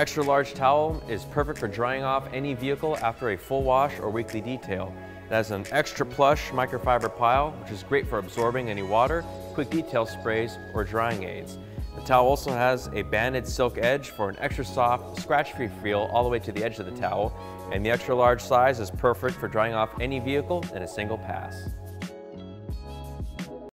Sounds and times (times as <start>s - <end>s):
Speech: 0.0s - 21.7s
Music: 0.0s - 23.7s.